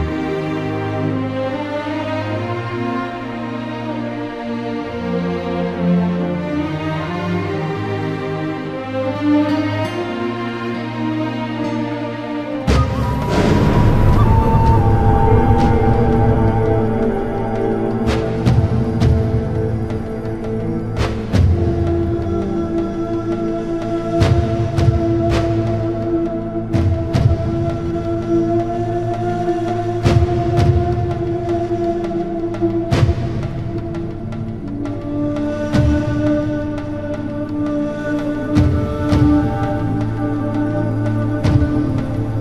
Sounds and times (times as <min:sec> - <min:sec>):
Music: 0:00.0 - 0:42.4.